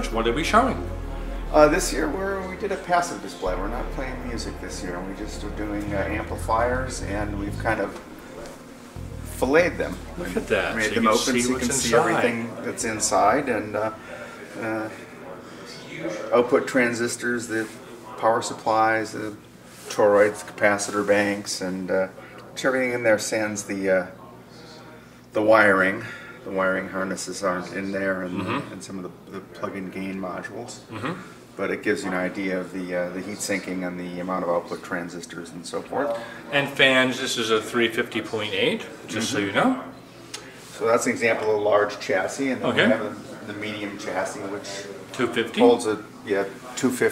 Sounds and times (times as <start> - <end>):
Speech: 0.0 - 8.0, 9.2 - 47.1.